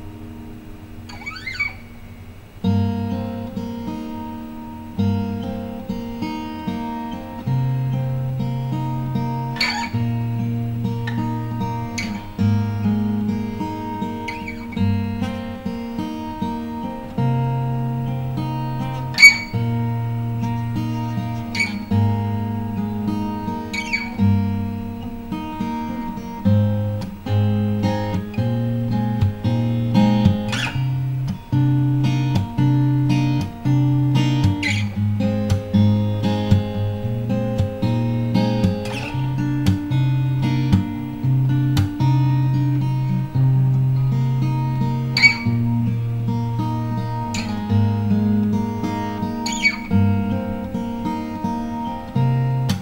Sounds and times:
Acoustic guitar: 0.0s - 52.8s
Strum: 0.0s - 52.8s.

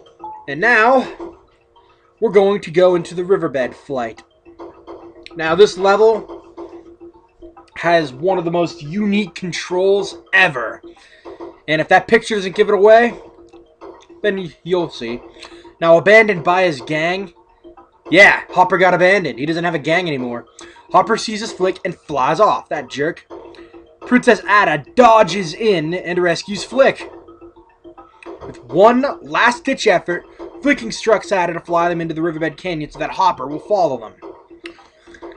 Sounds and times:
Music: 0.0s - 35.3s
Speech: 0.5s - 1.2s, 2.2s - 4.2s, 5.4s - 6.2s, 7.8s - 10.8s, 11.7s - 13.2s, 14.3s - 15.2s, 15.8s - 17.3s, 18.1s - 23.2s, 24.1s - 27.0s, 28.6s - 34.2s.

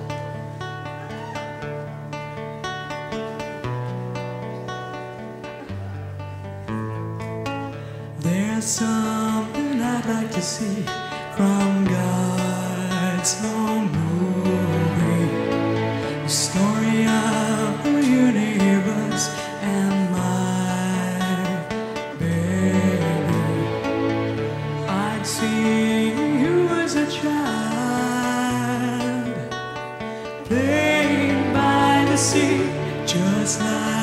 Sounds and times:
Music: 0.0s - 34.0s.

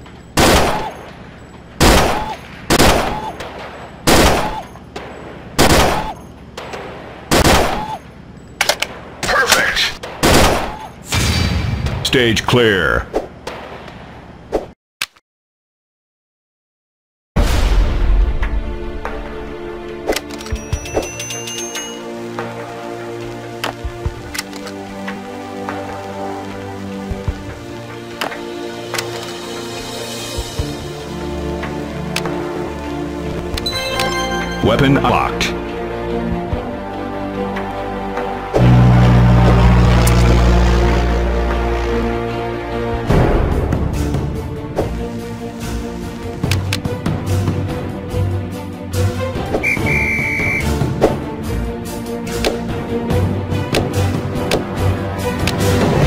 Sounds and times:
Speech: 9.2s - 10.0s, 12.0s - 13.1s, 34.6s - 35.6s
Music: 17.4s - 56.0s.

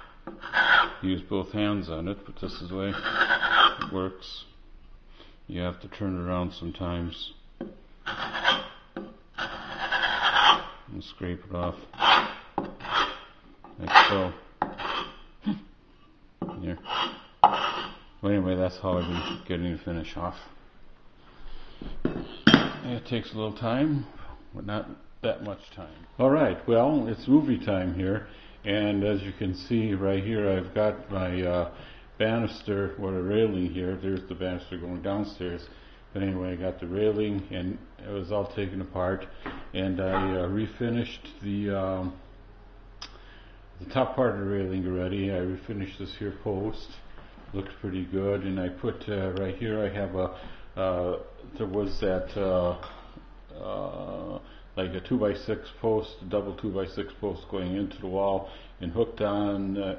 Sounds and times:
Rub: 0.4s - 1.0s, 2.9s - 3.9s, 8.1s - 8.8s, 9.4s - 10.8s, 12.0s - 13.3s, 13.9s - 15.2s, 16.8s - 18.0s.

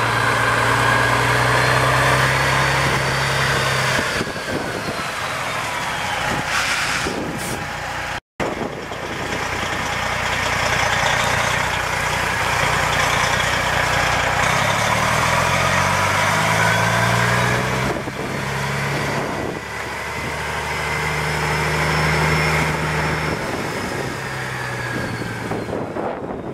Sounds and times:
Truck: 0.0s - 26.5s.

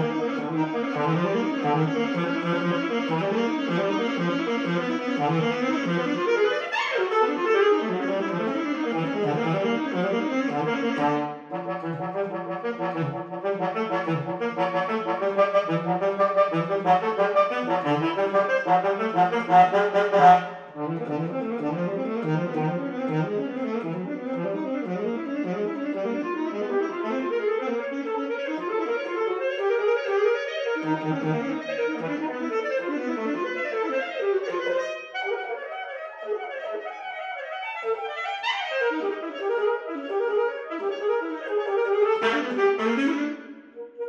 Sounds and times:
Brass instrument: 0.0s - 44.0s
Jazz: 0.0s - 44.0s
Saxophone: 0.0s - 44.0s.

